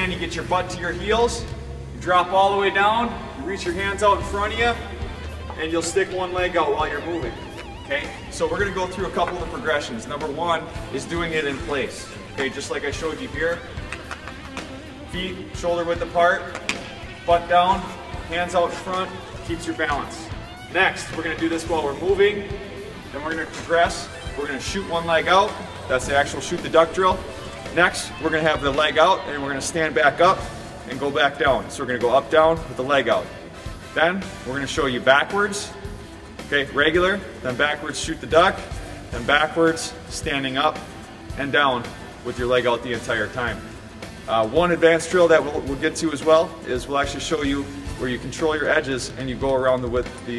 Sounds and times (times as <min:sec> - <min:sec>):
Speech: 0:00.0 - 0:04.9, 0:05.6 - 0:07.3, 0:07.9 - 0:13.6, 0:15.2 - 0:16.5, 0:17.3 - 0:22.5, 0:23.1 - 0:27.2, 0:27.8 - 0:33.3, 0:34.0 - 0:35.7, 0:36.5 - 0:43.6, 0:44.3 - 0:50.3
Music: 0:00.0 - 0:50.3.